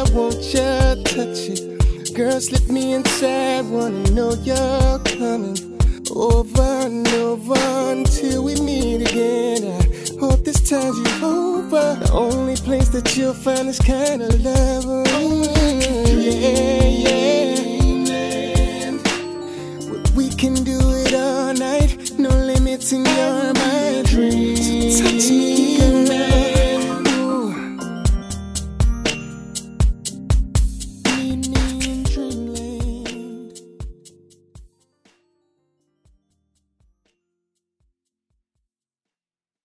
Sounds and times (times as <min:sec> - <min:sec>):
Rhythm and blues: 0:00.0 - 0:35.3.